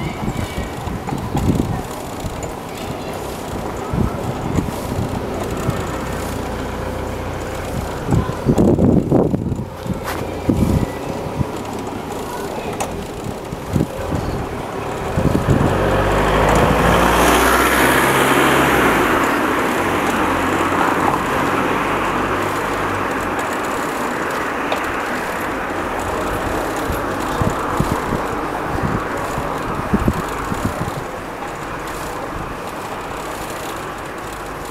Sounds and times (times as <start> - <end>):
Speech: 0.0 - 6.4, 10.2 - 15.4
Vehicle: 0.0 - 34.7.